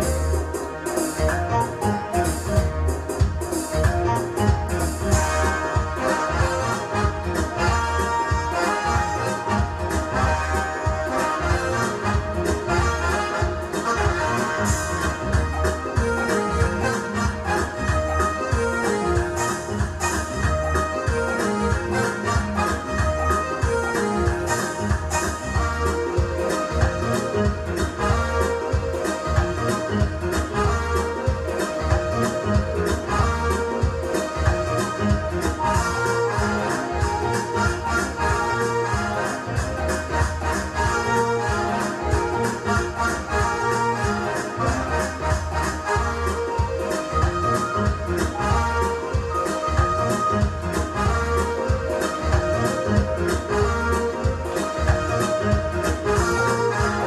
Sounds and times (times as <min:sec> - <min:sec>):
Dance music: 0:00.0 - 0:57.0.